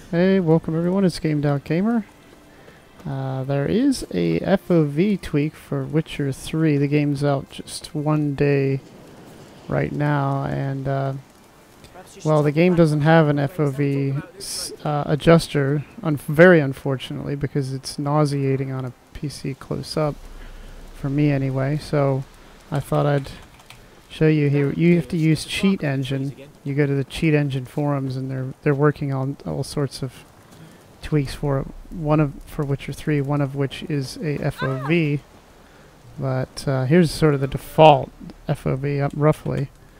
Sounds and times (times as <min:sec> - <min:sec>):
Speech: 0:00.1 - 0:02.1, 0:03.0 - 0:08.8, 0:09.7 - 0:11.2, 0:11.9 - 0:20.2, 0:21.0 - 0:23.4, 0:24.1 - 0:30.2, 0:31.0 - 0:35.2, 0:36.2 - 0:39.7.